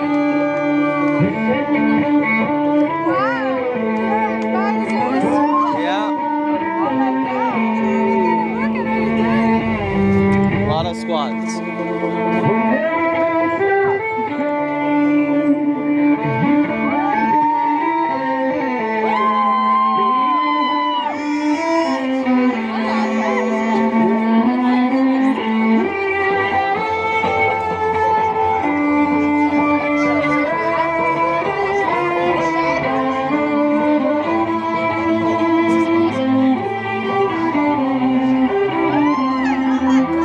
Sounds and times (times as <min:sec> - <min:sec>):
Violin, fiddle: 0:00.0 - 0:40.2.